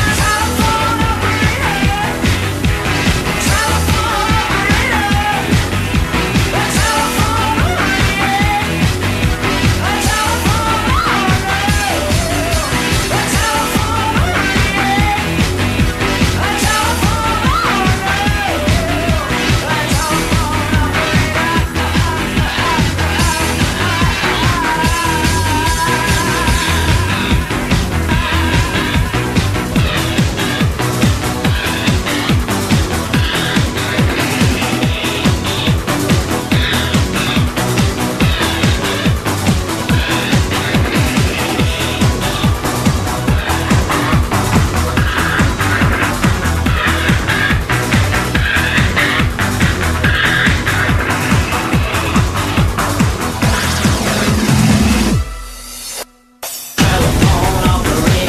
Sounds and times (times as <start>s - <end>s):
Music: 0.0s - 58.2s.